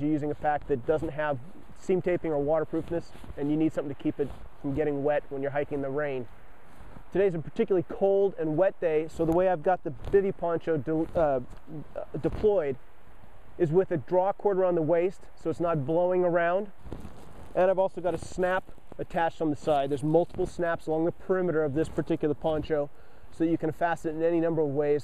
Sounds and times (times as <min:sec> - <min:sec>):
Speech: 0:00.0 - 0:06.3, 0:07.1 - 0:12.8, 0:13.6 - 0:16.7, 0:17.6 - 0:25.0.